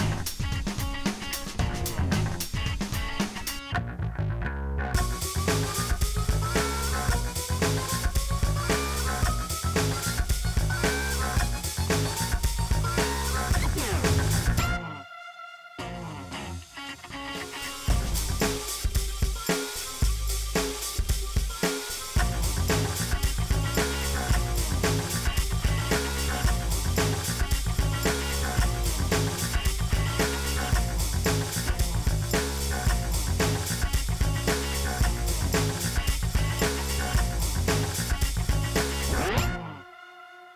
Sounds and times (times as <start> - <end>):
Music: 0.0 - 40.5.